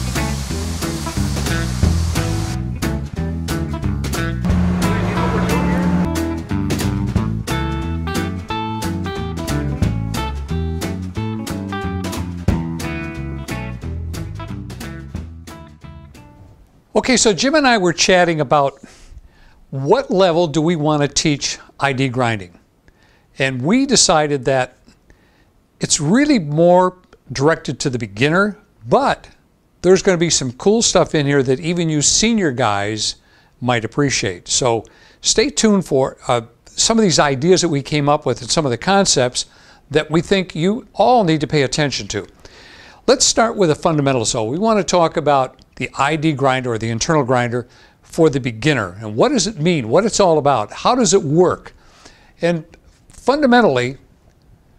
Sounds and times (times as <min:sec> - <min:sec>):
Speech: 0:04.8 - 0:06.1, 0:16.9 - 0:18.8, 0:19.7 - 0:22.6, 0:23.4 - 0:24.8, 0:25.8 - 0:42.3, 0:43.1 - 0:51.7, 0:52.4 - 0:54.0.